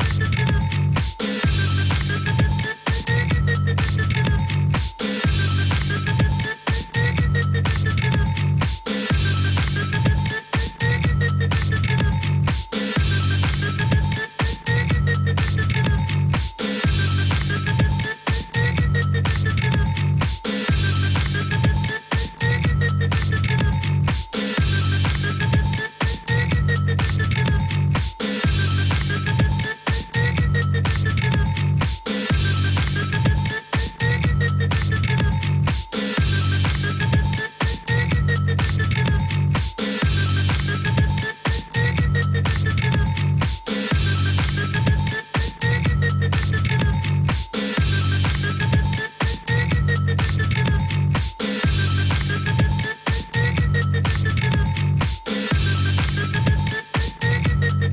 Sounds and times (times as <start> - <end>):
Music: 0.0 - 57.9.